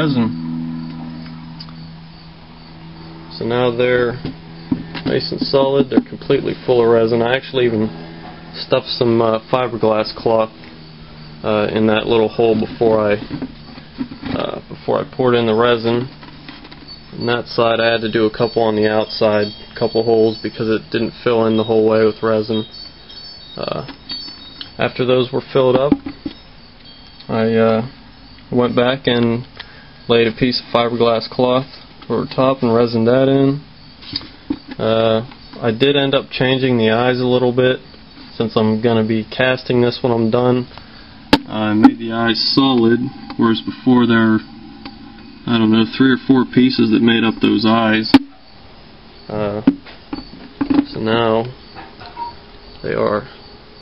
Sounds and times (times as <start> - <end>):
Speech: 0.0 - 0.4, 3.3 - 4.3, 5.0 - 7.9, 8.6 - 10.5, 11.4 - 13.3, 14.3 - 16.1, 17.2 - 22.7, 23.6 - 23.9, 24.8 - 26.0, 27.3 - 29.5, 30.1 - 33.7, 34.8 - 37.8, 38.4 - 40.7, 41.5 - 44.5, 45.4 - 48.2, 49.3 - 49.7, 50.8 - 51.6, 52.8 - 53.4
Outside, rural or natural: 0.0 - 53.8.